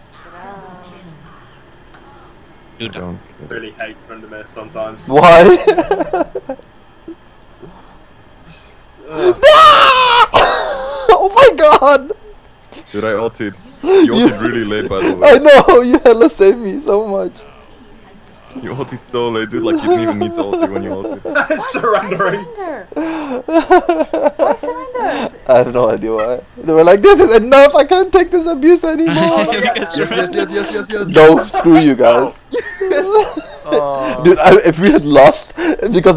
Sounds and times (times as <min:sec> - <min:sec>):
Conversation: 0:00.0 - 0:36.1
Male speech, man speaking: 0:02.8 - 0:05.8, 0:11.1 - 0:12.2, 0:12.9 - 0:22.5, 0:25.5 - 0:36.1.